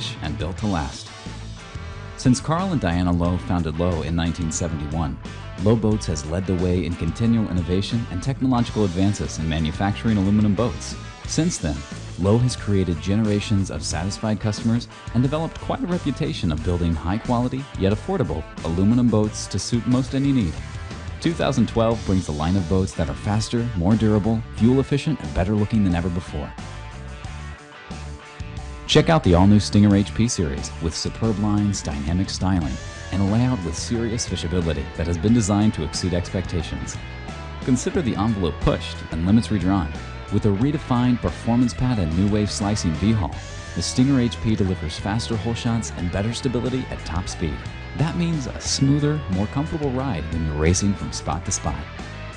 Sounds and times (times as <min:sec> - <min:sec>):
Speech: 0:00.0 - 0:01.1, 0:02.2 - 0:20.6, 0:21.2 - 0:26.6, 0:28.9 - 0:37.0, 0:37.6 - 0:51.9
Music: 0:00.0 - 0:52.3.